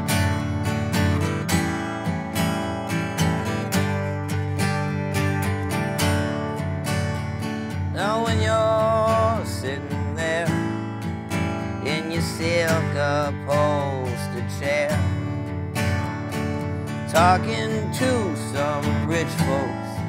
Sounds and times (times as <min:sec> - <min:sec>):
Music: 0:00.0 - 0:20.0.